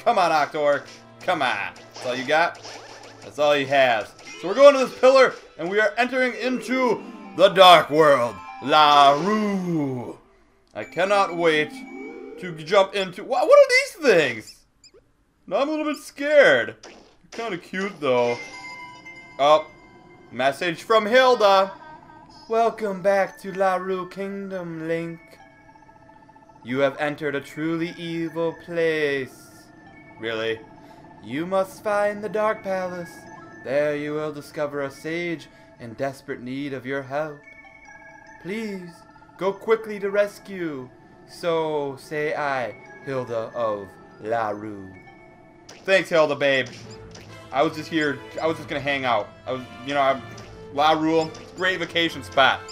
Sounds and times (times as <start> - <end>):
Speech: 0.0 - 2.6, 3.3 - 10.2, 10.8 - 11.7, 12.4 - 14.6, 15.5 - 16.8, 17.4 - 18.4, 20.4 - 21.7, 22.5 - 25.2, 26.7 - 29.6, 31.2 - 37.4, 38.5 - 45.0, 45.9 - 46.7, 47.5 - 52.6
Music: 0.0 - 13.2, 17.4 - 52.7.